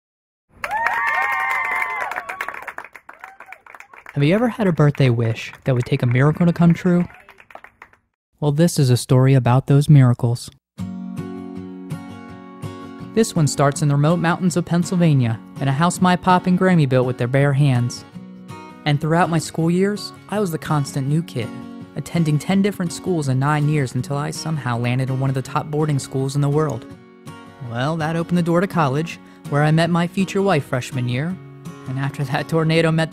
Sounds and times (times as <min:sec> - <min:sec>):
Speech: 0:04.1 - 0:07.4, 0:08.4 - 0:10.6, 0:13.2 - 0:18.0, 0:18.9 - 0:26.8, 0:27.6 - 0:33.1.